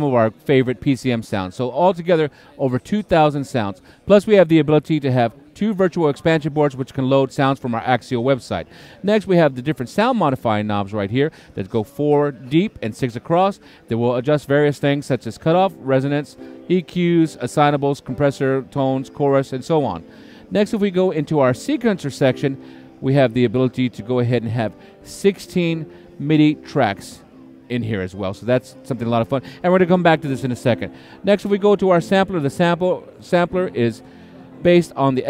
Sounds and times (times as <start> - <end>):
Speech: 0.0 - 35.3.